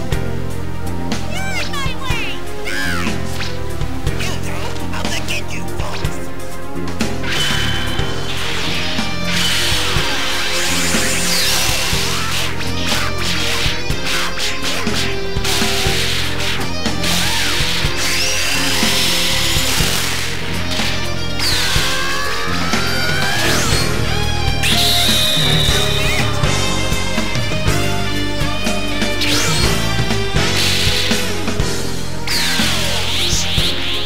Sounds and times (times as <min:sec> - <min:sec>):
Music: 0:00.0 - 0:34.0.